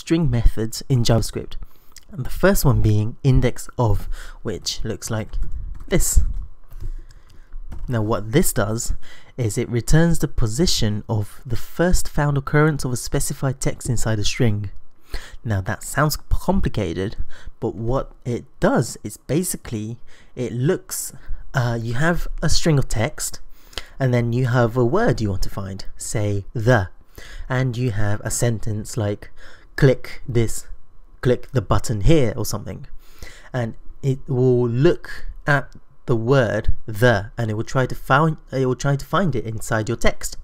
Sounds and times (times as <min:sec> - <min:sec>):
Speech: 0:00.0 - 0:06.4, 0:07.9 - 0:14.8, 0:15.4 - 0:32.9, 0:33.5 - 0:40.4.